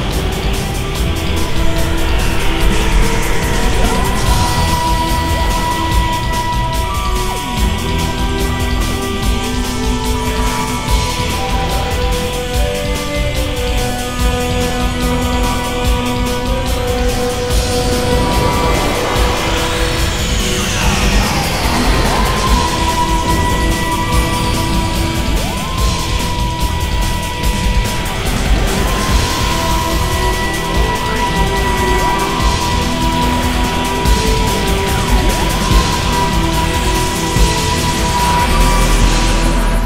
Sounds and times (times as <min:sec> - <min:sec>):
Background music: 0:00.0 - 0:39.8.